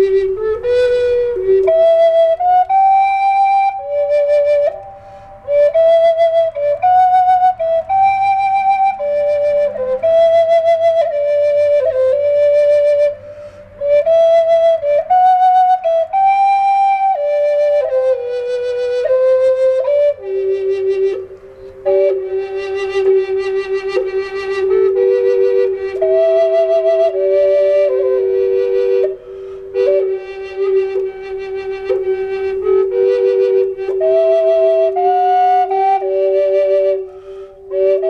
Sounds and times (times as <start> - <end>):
Flute: 0.0 - 38.0.